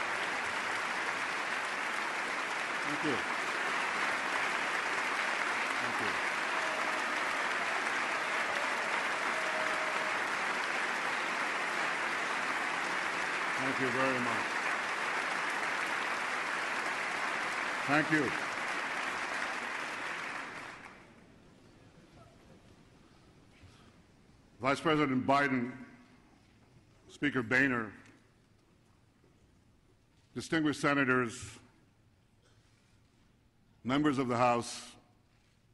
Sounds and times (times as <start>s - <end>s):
Male speech, man speaking: 13.6s - 14.4s, 17.9s - 18.4s, 24.6s - 26.0s, 27.1s - 28.0s, 30.4s - 31.7s, 33.8s - 35.0s.